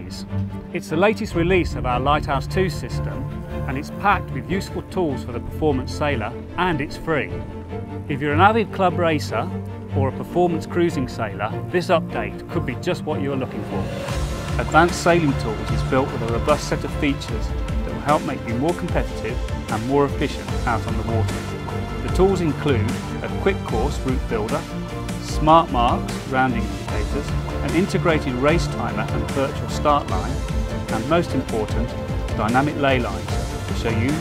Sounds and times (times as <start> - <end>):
Speech: 0.0 - 7.4, 8.1 - 13.9, 14.6 - 21.4, 22.0 - 34.2
Music: 0.0 - 34.2.